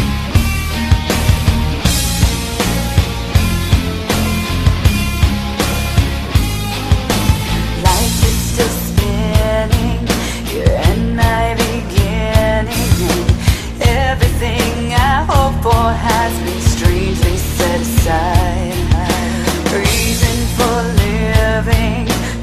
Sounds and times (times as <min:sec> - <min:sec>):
Music: 0:00.0 - 0:22.4.